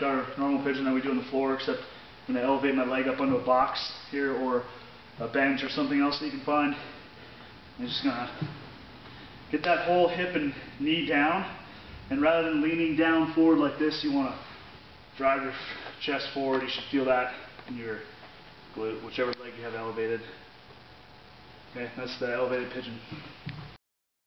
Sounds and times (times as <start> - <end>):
Speech: 0.0 - 7.0, 7.8 - 8.6, 9.5 - 14.4, 15.2 - 18.1, 18.8 - 20.4, 21.8 - 23.3.